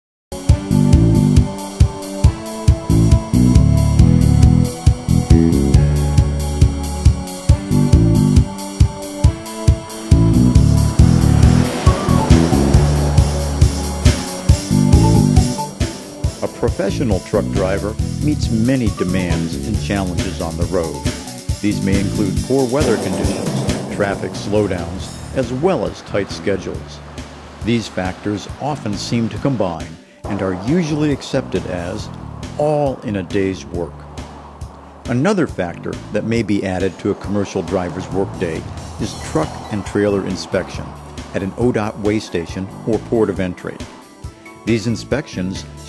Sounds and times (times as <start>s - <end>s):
Music: 0.3s - 45.8s
Truck: 9.5s - 45.8s
Speech: 16.4s - 21.0s, 21.6s - 27.0s, 27.6s - 34.0s, 35.1s - 43.9s, 44.7s - 45.7s.